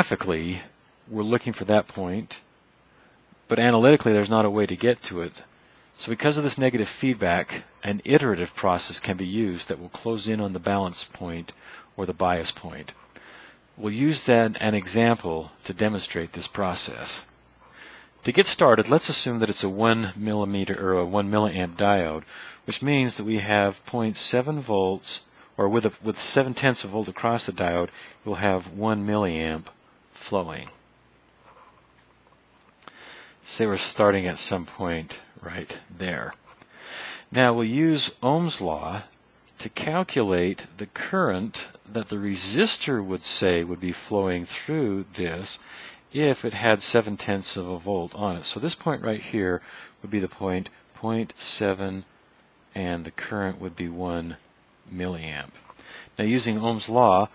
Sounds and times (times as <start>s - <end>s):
Speech: 0.0s - 2.5s, 3.4s - 13.0s, 13.8s - 17.4s, 18.2s - 30.8s, 33.4s - 36.4s, 37.3s - 52.1s, 52.7s - 57.3s
Writing: 31.4s - 32.0s.